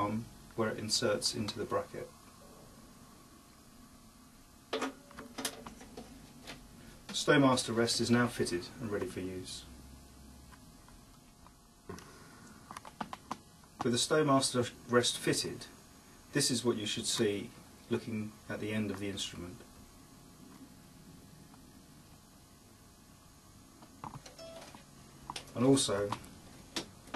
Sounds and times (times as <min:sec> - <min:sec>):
Speech: 0:00.0 - 0:02.2, 0:07.1 - 0:09.7, 0:13.8 - 0:19.7, 0:25.5 - 0:26.2.